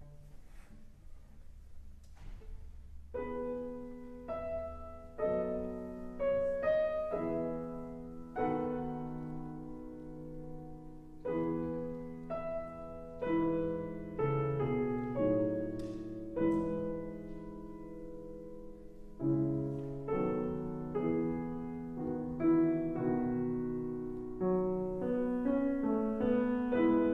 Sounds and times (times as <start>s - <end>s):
Music: 0.0s - 27.1s.